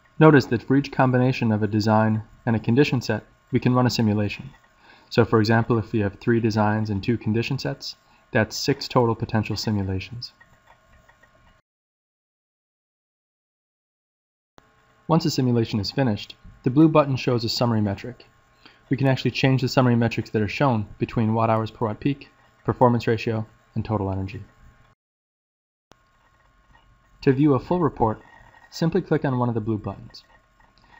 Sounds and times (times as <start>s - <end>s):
Speech: 0.2s - 10.4s, 15.1s - 18.3s, 18.9s - 24.5s, 27.2s - 30.3s.